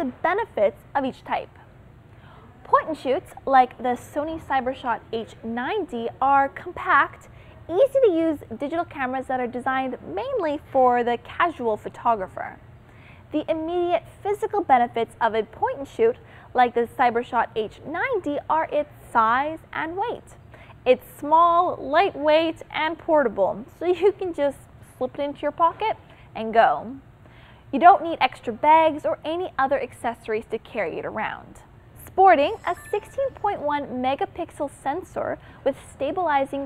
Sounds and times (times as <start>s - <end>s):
Speech: 0.0s - 1.6s, 2.6s - 12.6s, 13.3s - 27.0s, 27.8s - 36.6s.